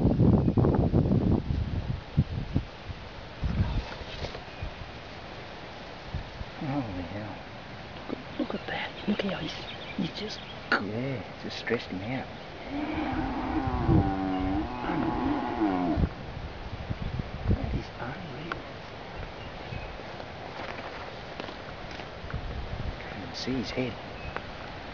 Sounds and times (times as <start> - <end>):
Speech: 6.6 - 7.4, 8.4 - 12.3, 17.6 - 18.6, 23.0 - 24.0
Animal: 12.6 - 16.0.